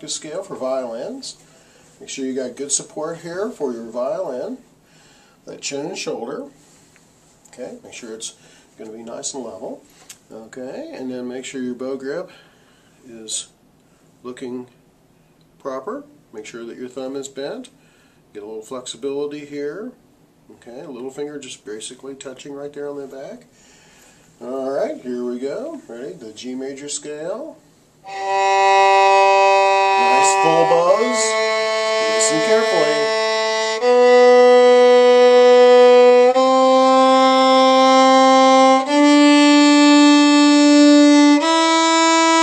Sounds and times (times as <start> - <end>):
Speech: 0.0 - 1.4, 2.0 - 4.6, 5.4 - 6.6, 7.5 - 12.4, 13.0 - 13.6, 14.2 - 14.8, 15.6 - 23.5, 24.4 - 27.6, 30.0 - 31.5, 32.1 - 33.1
Violin, fiddle: 28.0 - 42.4.